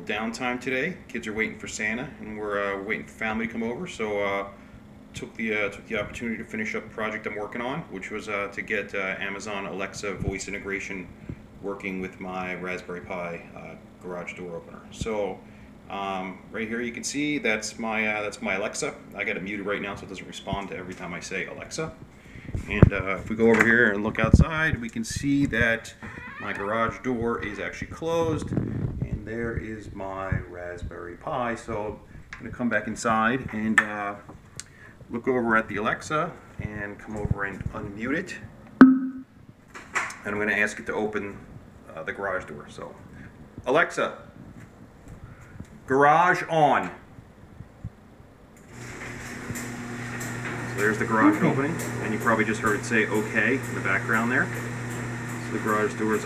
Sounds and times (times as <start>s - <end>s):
Speech: 0.0s - 4.6s, 5.2s - 22.0s, 22.6s - 34.3s, 35.1s - 38.5s, 40.2s - 44.3s, 45.9s - 47.0s, 50.7s - 54.5s, 55.4s - 56.2s.